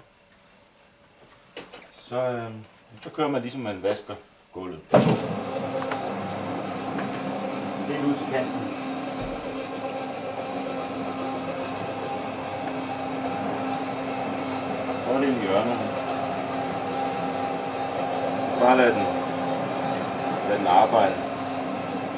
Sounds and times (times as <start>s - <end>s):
Speech: 2.0s - 4.9s, 7.8s - 8.7s, 15.1s - 16.0s, 18.6s - 19.2s, 20.4s - 21.2s.